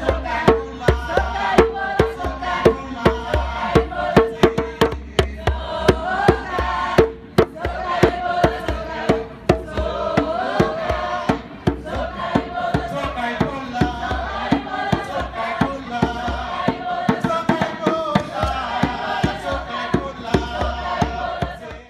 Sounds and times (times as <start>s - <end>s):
Drum: 0.0s - 21.8s.